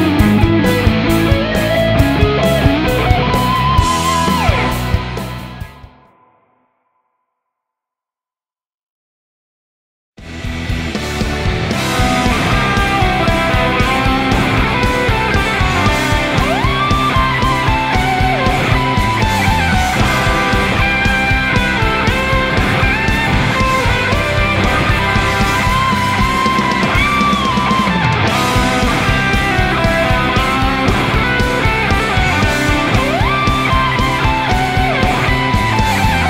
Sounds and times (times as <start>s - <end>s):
Electric guitar: 0.0s - 6.4s, 10.2s - 36.2s
Rock music: 0.0s - 6.4s, 10.2s - 36.2s.